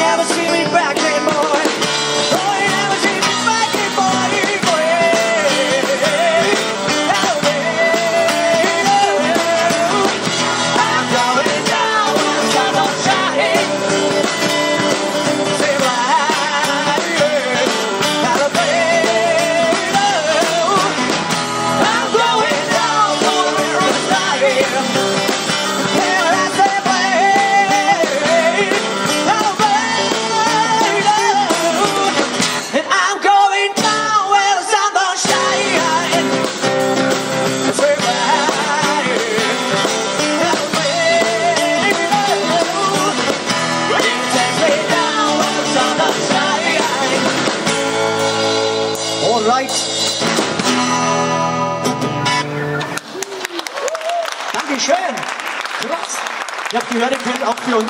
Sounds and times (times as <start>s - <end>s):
Guitar: 0.0s - 57.8s.